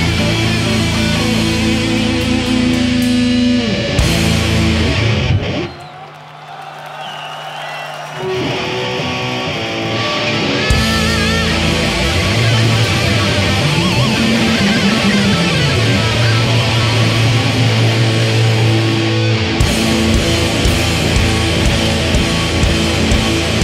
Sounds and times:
Music: 0:00.0 - 0:05.8, 0:08.2 - 0:23.6.

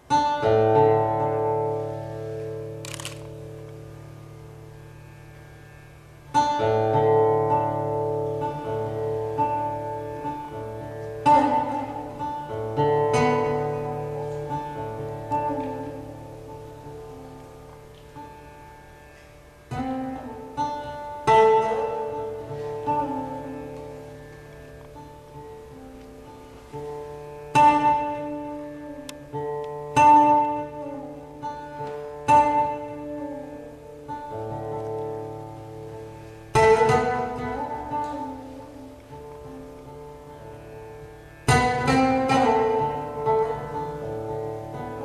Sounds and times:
Bowed string instrument: 0:00.0 - 0:45.0.

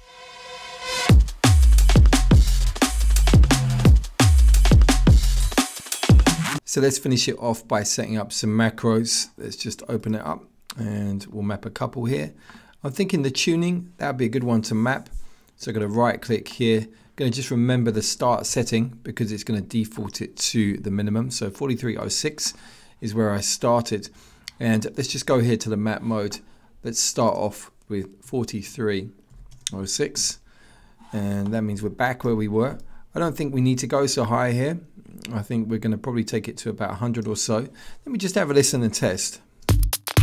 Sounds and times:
Speech: 0:06.6 - 0:30.4, 0:31.1 - 0:39.5.

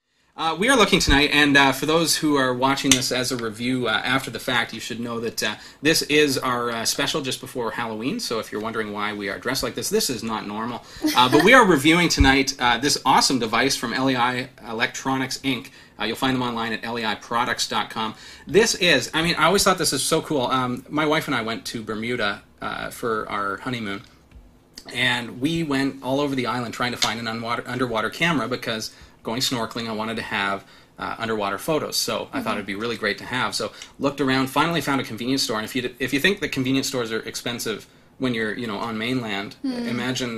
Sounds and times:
Speech: 0:00.4 - 0:24.1, 0:24.8 - 0:40.3.

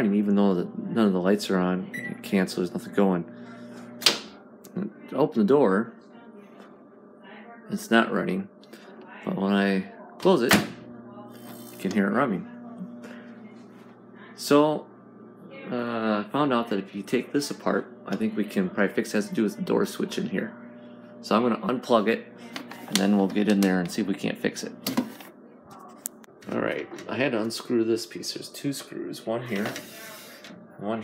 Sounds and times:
Speech: 0:00.0 - 0:03.7, 0:04.7 - 0:31.0.

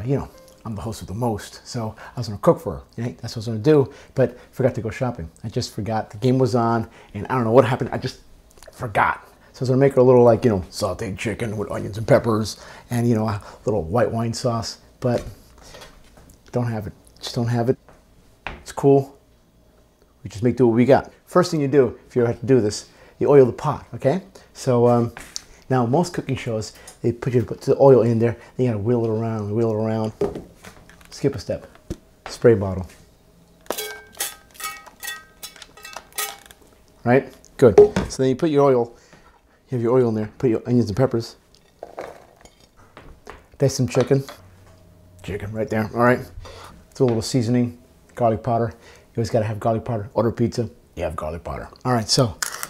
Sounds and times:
Speech: 0:00.0 - 0:15.4, 0:16.5 - 0:17.8, 0:18.6 - 0:19.2, 0:20.2 - 0:30.2, 0:31.1 - 0:31.7, 0:32.3 - 0:33.0, 0:37.0 - 0:39.0, 0:39.7 - 0:41.4, 0:43.6 - 0:44.4, 0:45.2 - 0:46.4, 0:47.0 - 0:52.4.

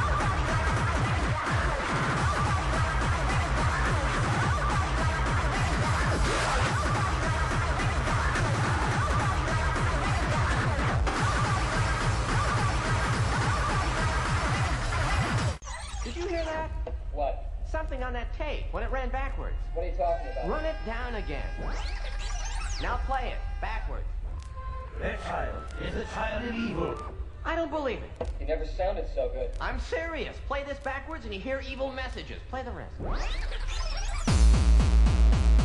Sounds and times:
Music: 0:00.0 - 0:16.5, 0:18.7 - 0:27.4, 0:33.0 - 0:35.6.

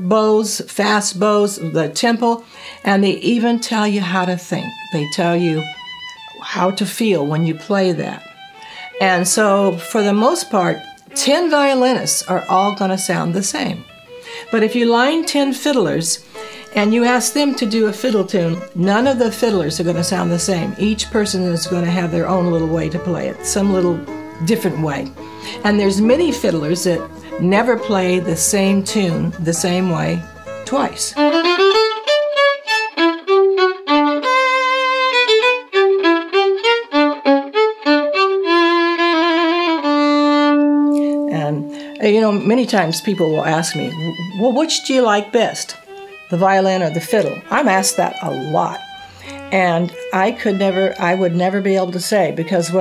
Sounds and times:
Speech: 0:00.0 - 0:05.7, 0:06.4 - 0:08.2, 0:09.0 - 0:13.8, 0:14.5 - 0:16.2, 0:16.8 - 0:31.2, 0:41.3 - 0:48.8, 0:49.5 - 0:52.8
Violin, fiddle: 0:00.9 - 0:52.8.

